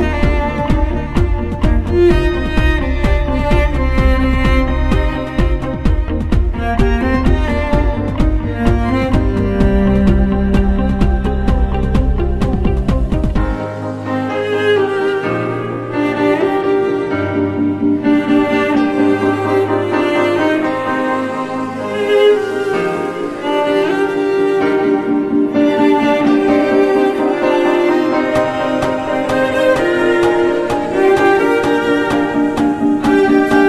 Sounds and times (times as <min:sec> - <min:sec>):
Orchestra: 0:00.0 - 0:33.6
String section: 0:00.0 - 0:33.6.